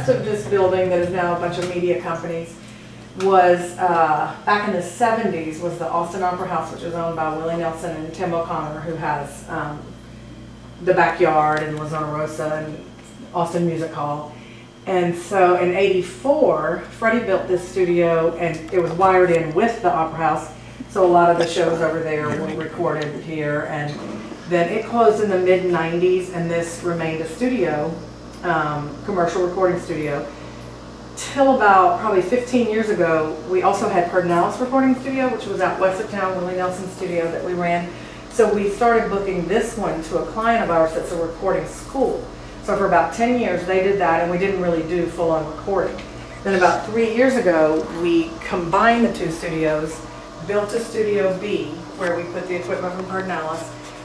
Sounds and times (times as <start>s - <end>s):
Speech: 0.0s - 2.6s, 3.2s - 9.9s, 10.8s - 14.3s, 14.9s - 30.3s, 31.2s - 53.7s.